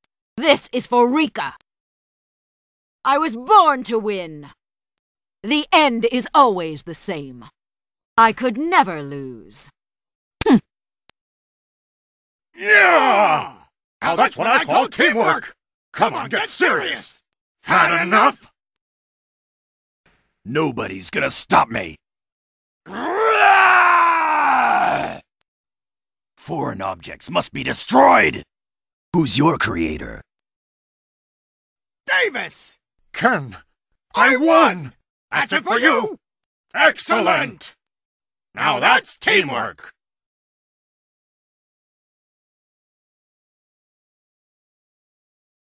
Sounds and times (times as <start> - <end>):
Speech: 0.4 - 1.6, 3.1 - 4.6, 5.4 - 7.5, 8.2 - 9.7, 12.6 - 18.5, 20.5 - 22.0, 26.4 - 28.5, 29.2 - 30.3, 32.1 - 33.6, 34.2 - 36.2, 36.8 - 37.8, 38.6 - 40.0.